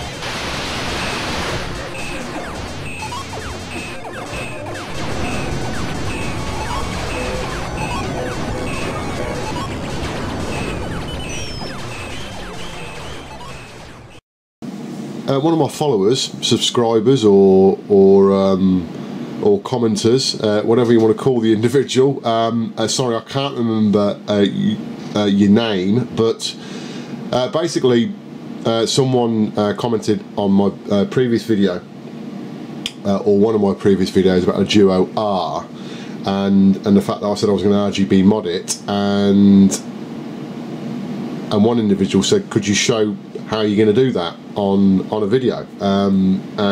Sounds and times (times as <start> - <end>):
Speech: 15.2 - 26.6, 27.3 - 31.9, 32.9 - 39.9, 41.5 - 46.7.